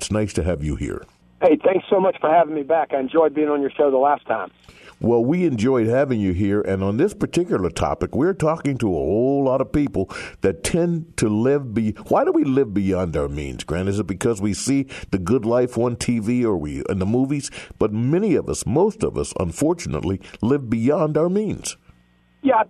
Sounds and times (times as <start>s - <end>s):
Speech: 0.0s - 21.8s.